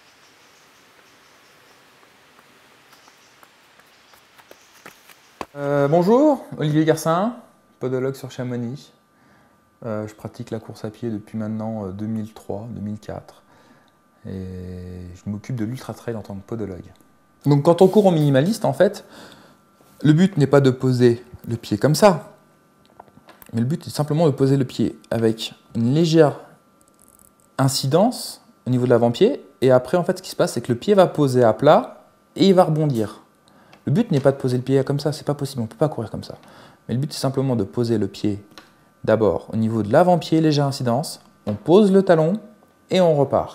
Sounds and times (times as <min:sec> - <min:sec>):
Inside, small room: 0:00.0 - 0:43.5
Speech: 0:05.6 - 0:09.0, 0:09.8 - 0:13.4, 0:14.2 - 0:19.1, 0:20.0 - 0:22.4, 0:23.5 - 0:26.5, 0:27.6 - 0:33.3, 0:33.9 - 0:43.5.